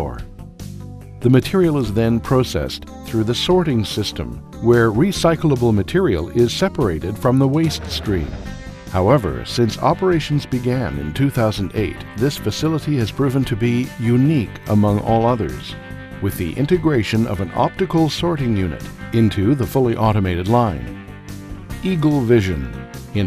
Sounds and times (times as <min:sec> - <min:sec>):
Speech: 0:00.0 - 0:00.3, 0:01.2 - 0:20.9, 0:21.8 - 0:23.2
Music: 0:00.0 - 0:23.2.